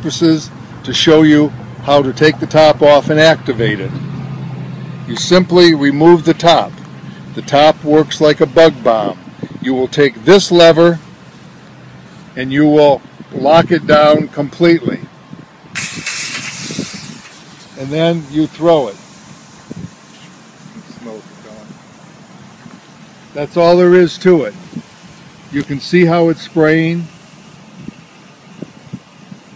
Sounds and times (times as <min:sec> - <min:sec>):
Speech: 0:00.0 - 0:03.9, 0:05.1 - 0:06.8, 0:07.4 - 0:11.0, 0:12.4 - 0:15.1, 0:17.8 - 0:19.0, 0:20.8 - 0:21.8, 0:23.4 - 0:24.6, 0:25.5 - 0:27.1
Spray: 0:15.8 - 0:29.5.